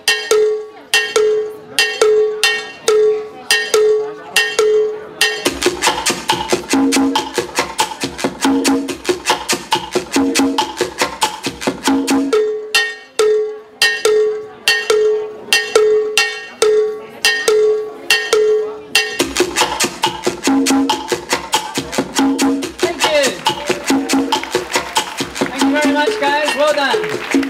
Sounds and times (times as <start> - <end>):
Maraca: 14.6 - 27.5.